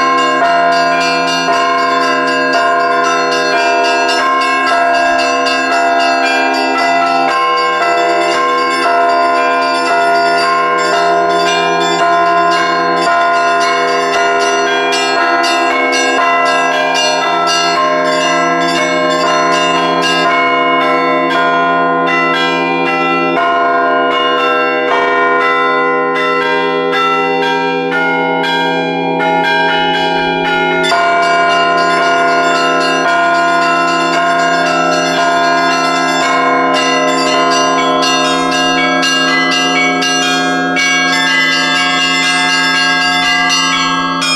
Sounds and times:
Bell: 0:00.0 - 0:44.3.

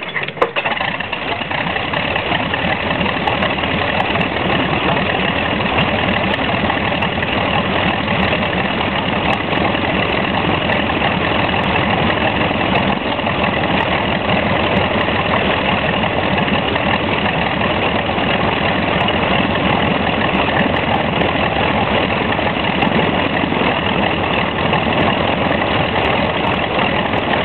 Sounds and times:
Idling: 0:00.0 - 0:27.4
Medium engine (mid frequency): 0:00.0 - 0:27.4
Vehicle: 0:00.0 - 0:27.4.

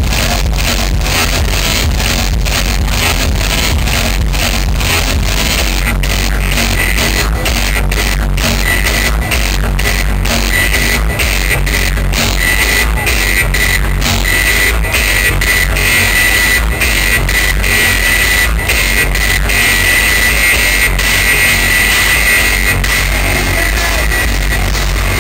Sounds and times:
Techno: 0:00.0 - 0:25.2
Trance music: 0:00.0 - 0:25.2.

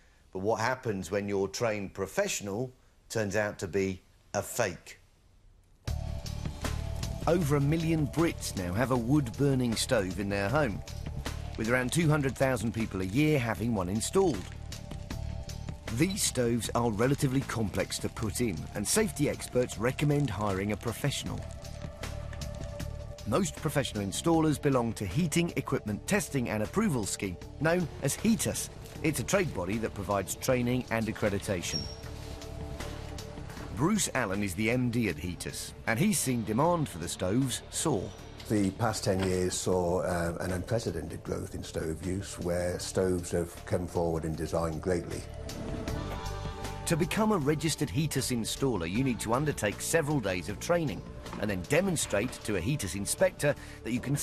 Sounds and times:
Speech: 0:00.4 - 0:05.0, 0:07.3 - 0:10.8, 0:11.6 - 0:14.5, 0:15.9 - 0:21.5, 0:23.3 - 0:31.9, 0:33.8 - 0:45.3, 0:46.9 - 0:54.2
Music: 0:05.8 - 0:54.2.

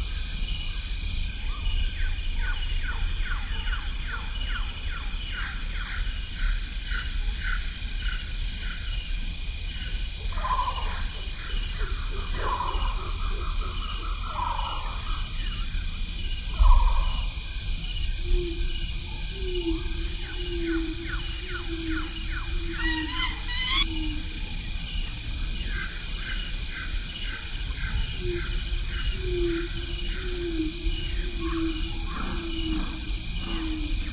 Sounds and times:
Outside, rural or natural: 0:00.0 - 0:34.1
Animal: 0:09.7 - 0:15.8, 0:16.4 - 0:34.1.

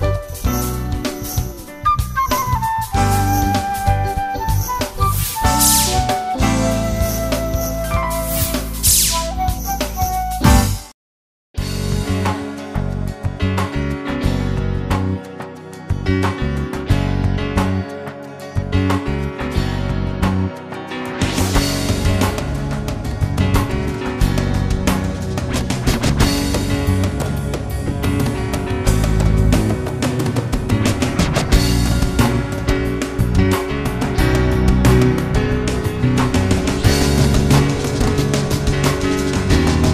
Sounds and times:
Background music: 0:00.0 - 0:11.0, 0:11.6 - 0:39.9.

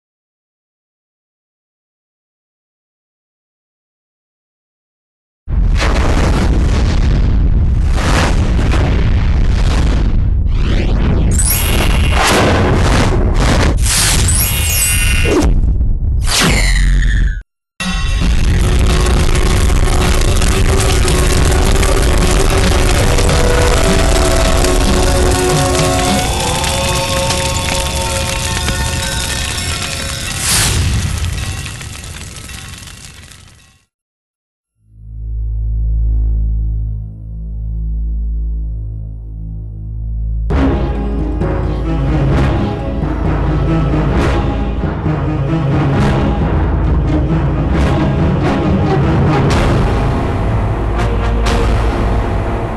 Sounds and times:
Music: 0:17.8 - 0:30.4, 0:35.0 - 0:52.7.

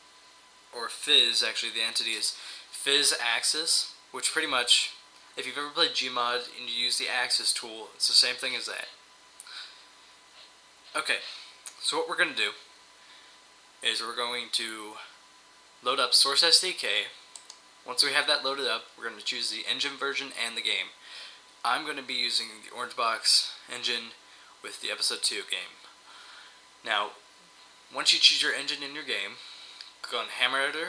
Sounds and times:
Speech: 0:00.7 - 0:09.0, 0:10.9 - 0:12.7, 0:13.8 - 0:15.2, 0:15.8 - 0:17.2, 0:17.9 - 0:21.0, 0:21.6 - 0:25.8, 0:26.8 - 0:27.2, 0:27.9 - 0:29.4, 0:30.0 - 0:30.8.

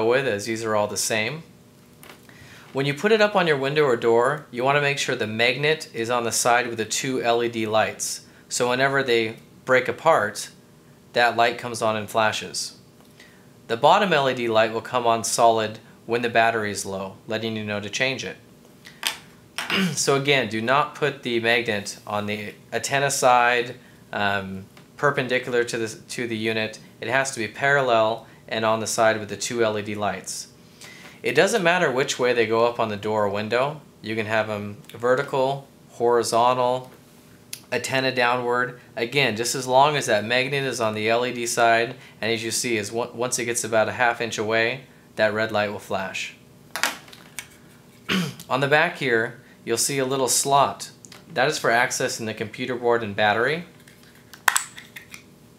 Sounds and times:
Speech: 0:00.0 - 0:01.5, 0:02.8 - 0:12.8, 0:13.7 - 0:18.4, 0:19.7 - 0:30.5, 0:31.2 - 0:36.9, 0:37.6 - 0:46.4, 0:48.1 - 0:53.7.

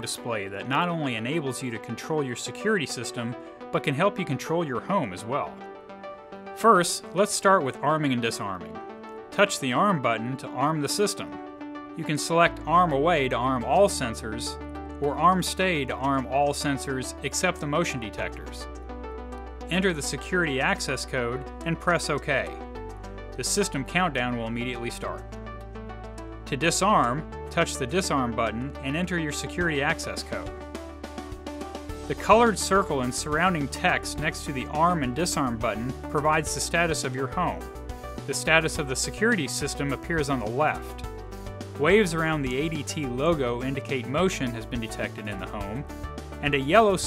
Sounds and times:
Speech: 0:00.0 - 0:05.5, 0:06.6 - 0:08.7, 0:09.4 - 0:11.3, 0:12.0 - 0:18.6, 0:19.7 - 0:22.6, 0:23.4 - 0:25.2, 0:26.5 - 0:30.5, 0:32.1 - 0:37.6, 0:38.3 - 0:41.0, 0:41.8 - 0:45.8, 0:46.4 - 0:47.0
Music: 0:00.0 - 0:47.0.

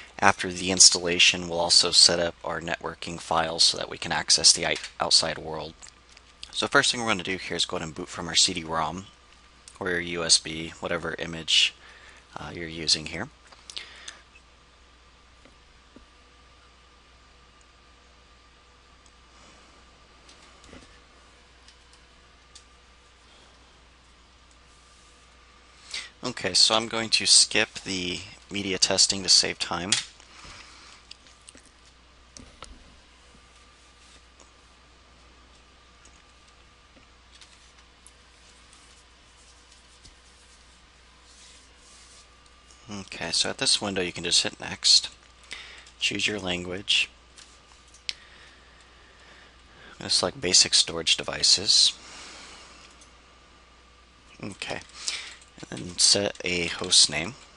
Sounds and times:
Speech: 0:00.2 - 0:05.8, 0:06.5 - 0:09.1, 0:09.7 - 0:13.4, 0:26.2 - 0:30.0, 0:42.9 - 0:45.2, 0:46.0 - 0:47.2, 0:49.9 - 0:52.0, 0:54.3 - 0:54.9, 0:55.6 - 0:57.4.

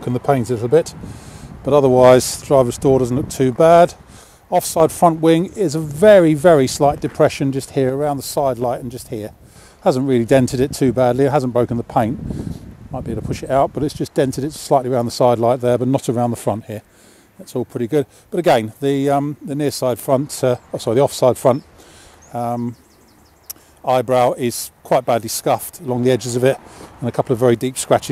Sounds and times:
Speech: 0:00.0 - 0:01.0, 0:01.6 - 0:12.2, 0:13.0 - 0:21.6, 0:22.3 - 0:22.8, 0:23.8 - 0:28.1.

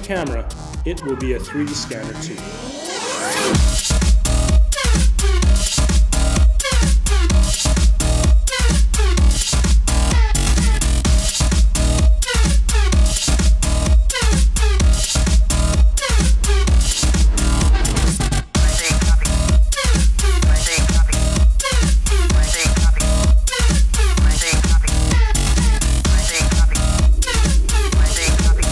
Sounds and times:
Music: 0:00.0 - 0:28.7.

